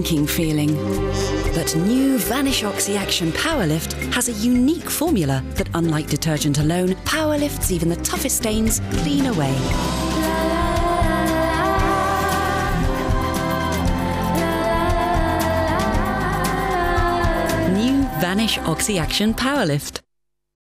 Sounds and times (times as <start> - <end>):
Music: 0.0 - 20.0.